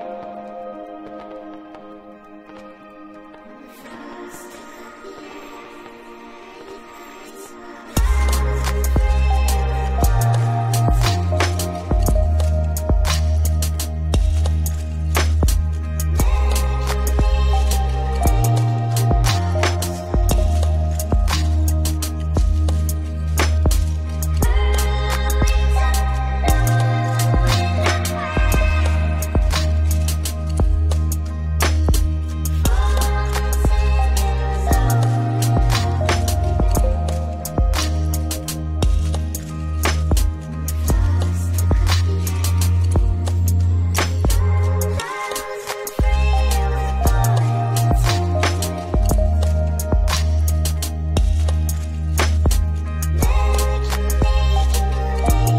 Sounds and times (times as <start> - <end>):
Music: 0.0 - 55.5.